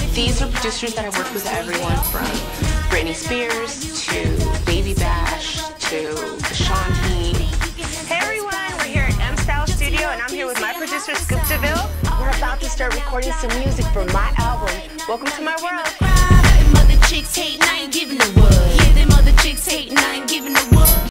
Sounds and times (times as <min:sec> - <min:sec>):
Speech: 0:00.0 - 0:16.0
Dance music: 0:00.0 - 0:21.1.